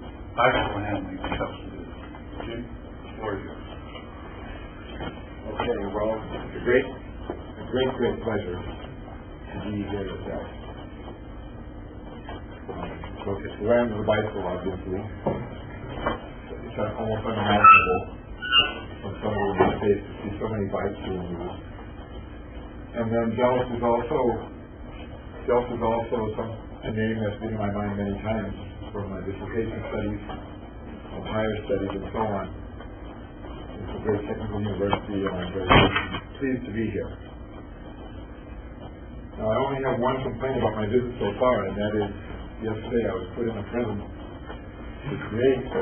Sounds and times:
Speech: 0:00.4 - 0:03.7, 0:05.4 - 0:10.6, 0:12.6 - 0:15.6, 0:16.5 - 0:21.7, 0:22.9 - 0:24.6, 0:25.4 - 0:30.4, 0:31.1 - 0:32.6, 0:33.8 - 0:37.2, 0:39.4 - 0:44.2, 0:45.0 - 0:45.8.

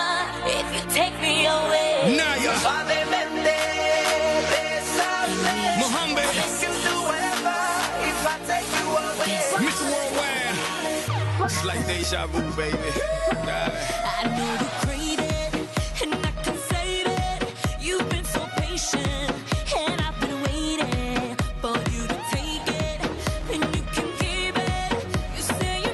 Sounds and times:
Music: 0:00.0 - 0:25.9
Rapping: 0:00.0 - 0:25.9.

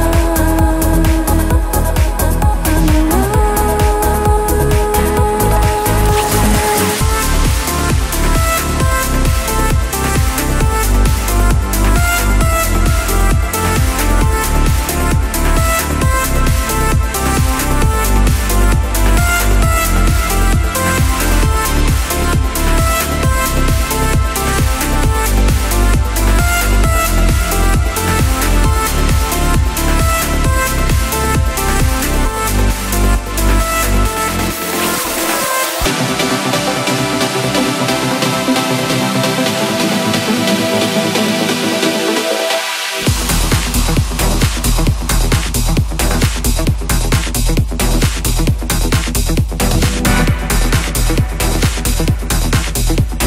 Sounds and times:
Sampler: 0:00.0 - 0:17.2.

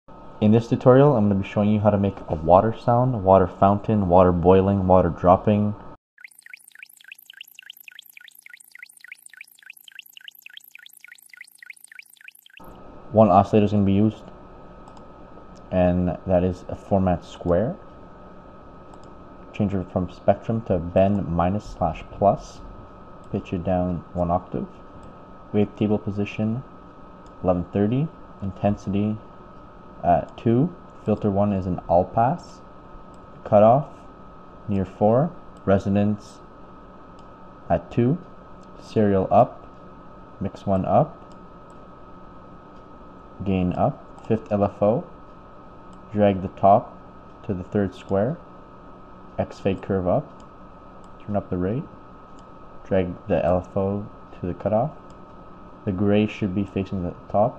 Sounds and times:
Speech: 0:00.4 - 0:05.9, 0:13.1 - 0:14.3, 0:15.7 - 0:17.8, 0:19.5 - 0:22.7, 0:23.3 - 0:24.8, 0:25.5 - 0:26.7, 0:27.4 - 0:29.2, 0:30.0 - 0:32.7, 0:33.4 - 0:34.0, 0:34.7 - 0:36.4, 0:37.7 - 0:38.2, 0:38.8 - 0:39.6, 0:40.4 - 0:41.2, 0:43.4 - 0:45.1, 0:46.1 - 0:48.4, 0:49.4 - 0:50.4, 0:51.2 - 0:52.0, 0:52.8 - 0:55.0, 0:55.9 - 0:57.5.

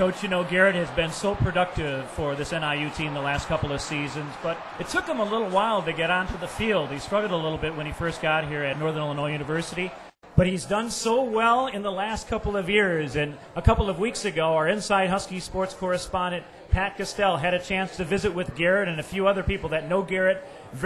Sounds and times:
Speech: 0:00.0 - 0:20.8.

